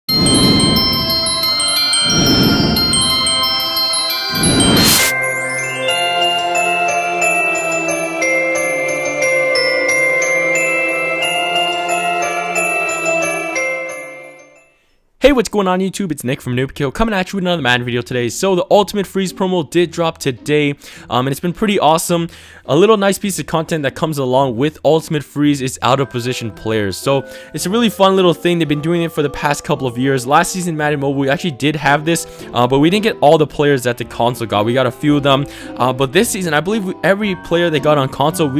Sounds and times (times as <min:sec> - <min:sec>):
Marimba, xylophone: 0:00.1 - 0:14.7
Glockenspiel: 0:00.1 - 0:15.0, 0:25.8 - 0:33.3, 0:34.0 - 0:38.5.